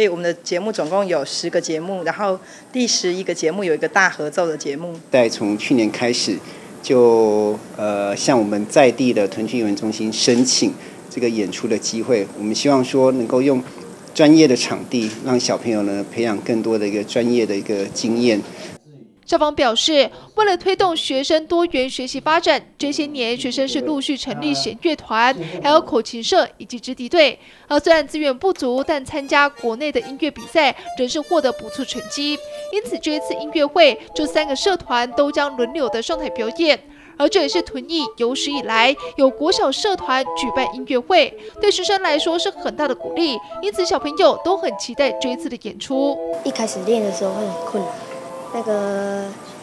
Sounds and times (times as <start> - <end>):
Speech: 0.0 - 47.9.